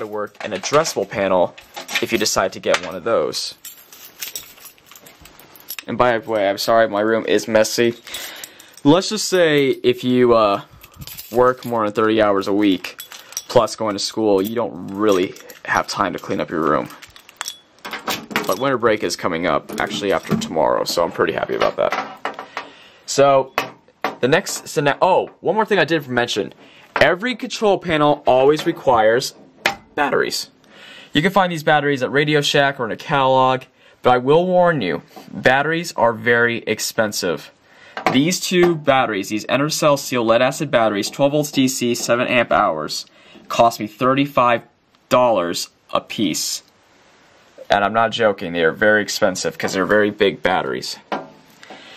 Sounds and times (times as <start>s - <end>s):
Speech: 0.0s - 3.6s, 5.8s - 8.0s, 8.8s - 10.7s, 11.3s - 17.0s, 18.5s - 22.0s, 23.1s - 23.5s, 24.2s - 29.4s, 30.0s - 30.6s, 31.2s - 46.7s, 47.6s - 51.1s.